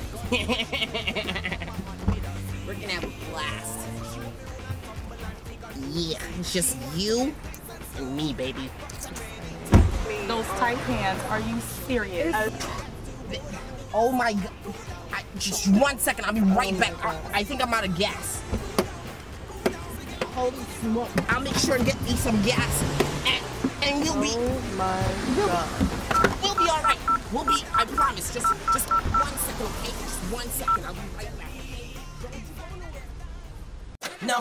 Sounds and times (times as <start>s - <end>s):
Music: 0.0s - 34.4s
Speech: 2.6s - 4.3s, 5.7s - 9.4s, 10.0s - 18.4s, 20.2s - 25.8s
Car passing by: 8.7s - 13.8s, 18.2s - 26.2s, 27.1s - 31.6s.